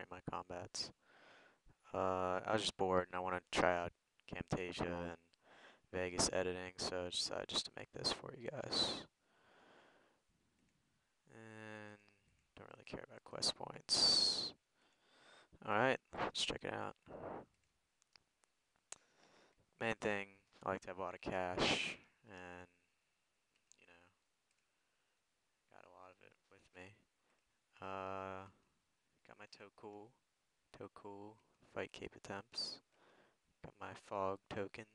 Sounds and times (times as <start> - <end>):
Speech: 0.0 - 1.0, 1.9 - 5.2, 5.9 - 9.1, 11.3 - 14.6, 15.6 - 17.4, 19.8 - 22.8, 23.8 - 24.2, 25.7 - 27.0, 27.8 - 28.6, 29.3 - 32.8, 33.6 - 34.9.